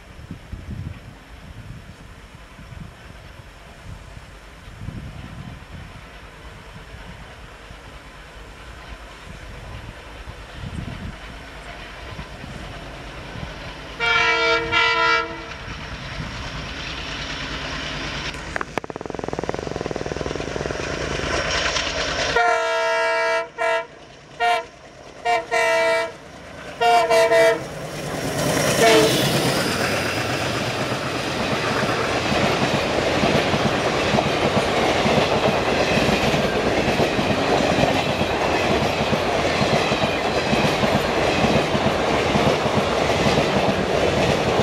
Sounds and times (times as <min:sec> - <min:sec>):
Railroad car, train wagon: 0:00.0 - 0:44.6
Train: 0:00.0 - 0:44.6.